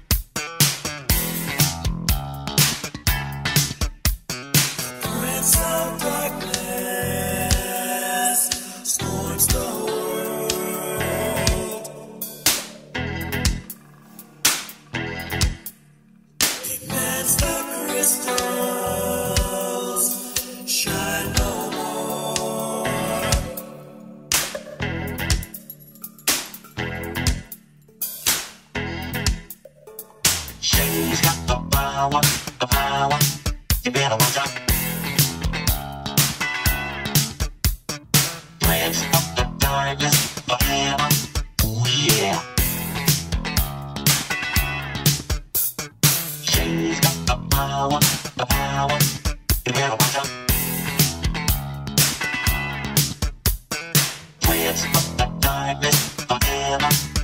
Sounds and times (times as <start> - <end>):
Music: 0.0 - 57.2.